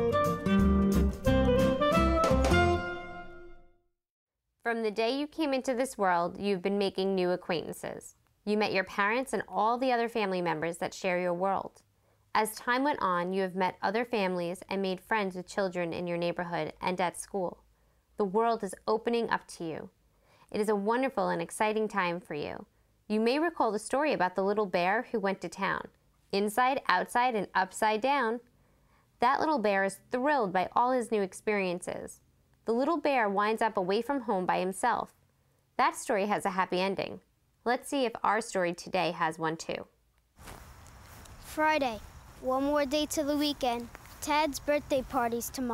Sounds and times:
Speech: 0:04.7 - 0:11.8, 0:12.4 - 0:17.6, 0:18.2 - 0:19.9, 0:20.5 - 0:28.4, 0:29.2 - 0:35.1, 0:35.8 - 0:39.9, 0:41.5 - 0:45.7.

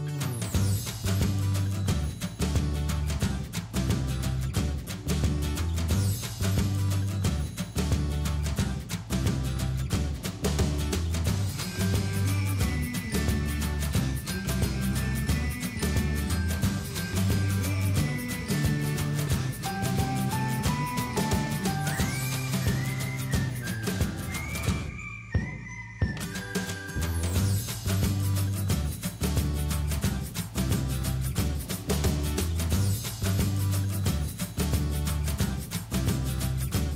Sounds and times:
Music: 0:00.0 - 0:36.9.

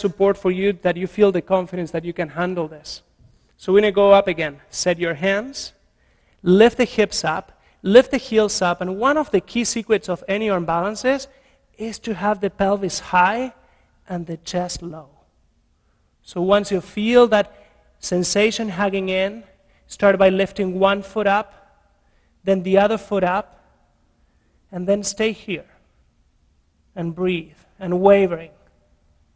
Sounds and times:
Speech: 0:00.0 - 0:03.0, 0:03.6 - 0:05.8, 0:06.4 - 0:15.2, 0:16.3 - 0:21.6, 0:22.4 - 0:23.6, 0:24.7 - 0:25.8, 0:27.0 - 0:28.6.

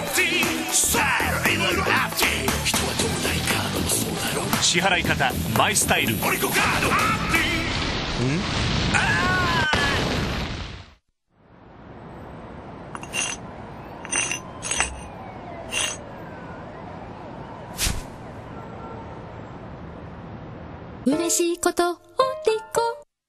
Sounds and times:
Music: 0:00.0 - 0:07.7, 0:21.1 - 0:23.1.

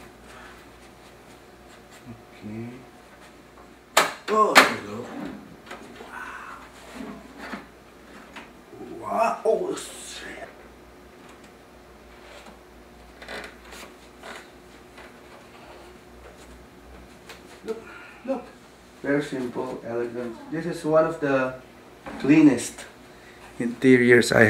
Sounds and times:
Inside, small room: 0:00.0 - 0:24.4
Speech: 0:08.8 - 0:10.6, 0:23.6 - 0:24.4.

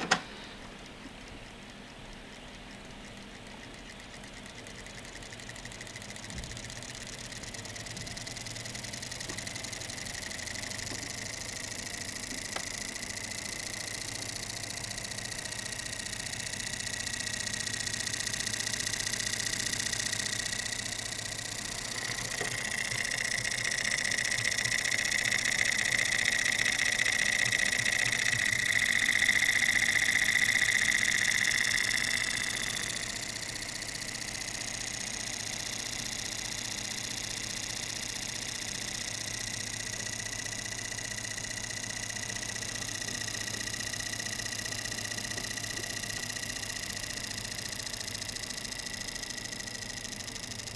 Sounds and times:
Engine: 0:00.0 - 0:50.7.

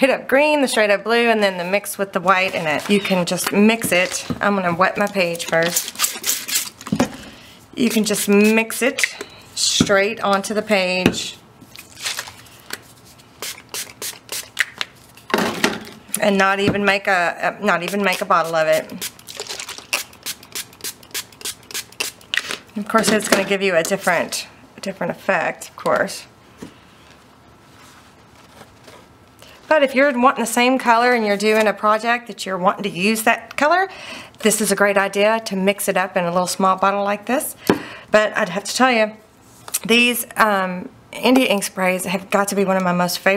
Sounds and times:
Speech: 0:00.0 - 0:05.8, 0:07.8 - 0:11.4, 0:16.2 - 0:19.0, 0:22.8 - 0:26.3, 0:29.7 - 0:37.6, 0:38.2 - 0:39.2, 0:39.8 - 0:43.3.

